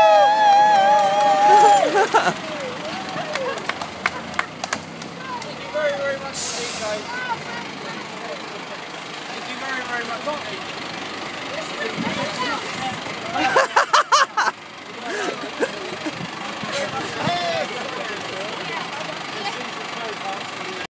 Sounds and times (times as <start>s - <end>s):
Medium engine (mid frequency): 0.0s - 20.9s
Truck: 0.0s - 20.9s
Idling: 0.5s - 20.9s.